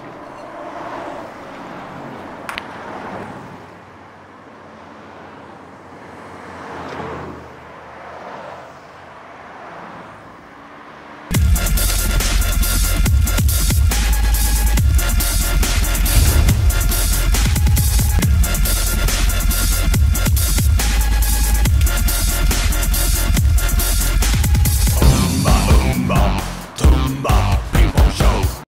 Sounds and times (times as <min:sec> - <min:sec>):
Music: 0:11.3 - 0:28.6.